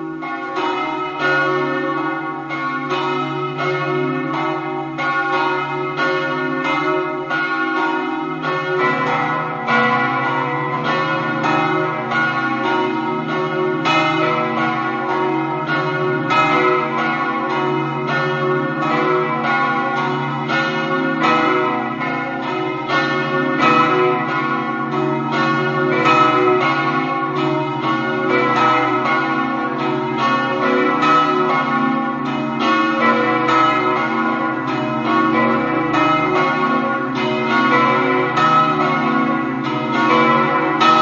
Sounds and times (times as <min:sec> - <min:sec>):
Bell: 0:00.0 - 0:41.0.